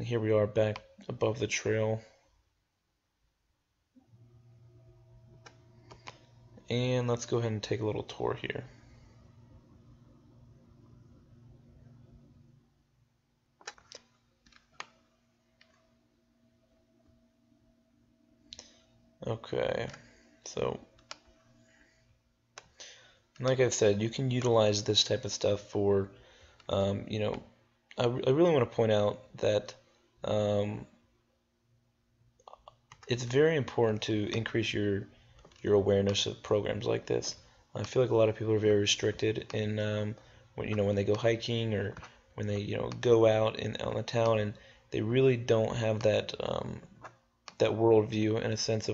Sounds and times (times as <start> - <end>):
Speech: 0.0 - 2.1, 6.7 - 8.7, 19.2 - 20.8, 23.4 - 30.9, 32.5 - 46.9, 47.5 - 48.9
Clicking: 21.0 - 21.3, 47.0 - 47.6.